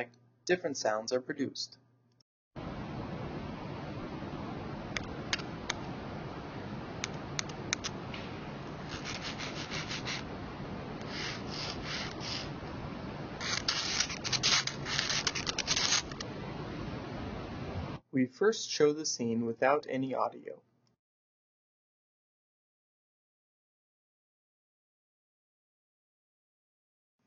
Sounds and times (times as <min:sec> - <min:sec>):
Speech: 0:00.0 - 0:01.8, 0:18.2 - 0:20.6.